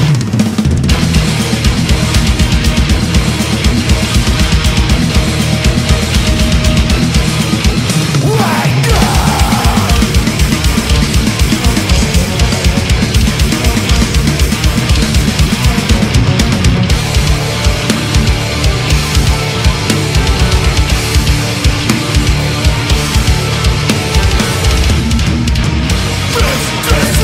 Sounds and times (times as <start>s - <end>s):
Guitar: 0.0s - 27.2s.